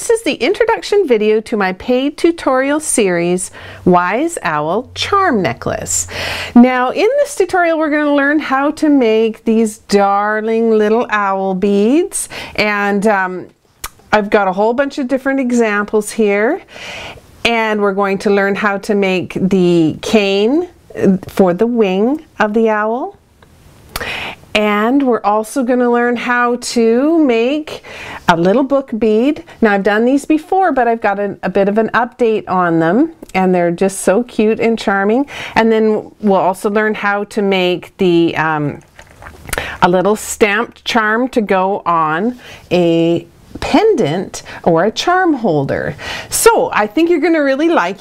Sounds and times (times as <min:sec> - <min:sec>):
Speech: 0:00.0 - 0:16.7, 0:17.4 - 0:23.2, 0:24.5 - 0:38.9, 0:39.8 - 0:48.0.